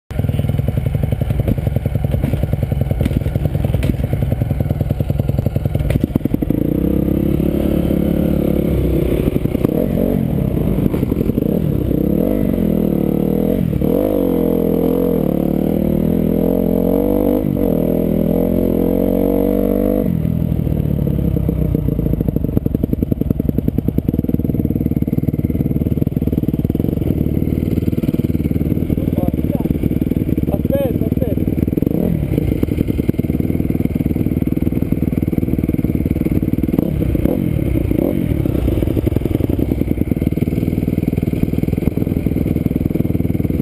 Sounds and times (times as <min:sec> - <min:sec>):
Motorcycle: 0:00.1 - 0:43.6.